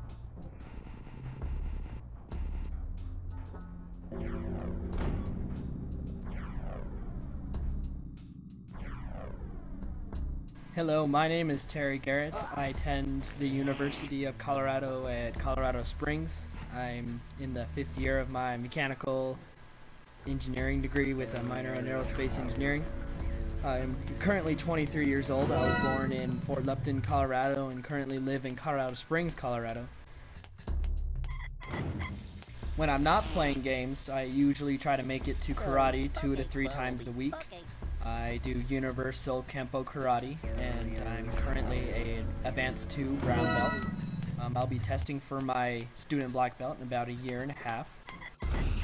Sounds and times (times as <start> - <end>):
Music: 0.0 - 19.1, 20.2 - 46.4, 48.3 - 48.8
Speech: 10.8 - 19.4, 20.2 - 22.9, 23.6 - 29.9, 32.8 - 43.7, 44.4 - 47.9.